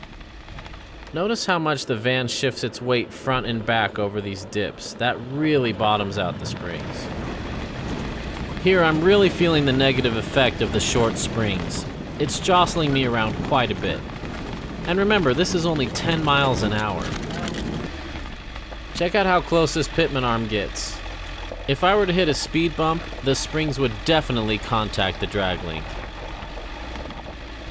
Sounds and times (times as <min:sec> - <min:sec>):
Car: 0:00.0 - 0:27.7
Outside, rural or natural: 0:00.0 - 0:27.7
Speech: 0:01.1 - 0:07.1, 0:08.6 - 0:14.0, 0:14.9 - 0:17.5, 0:19.0 - 0:21.0, 0:21.7 - 0:25.9.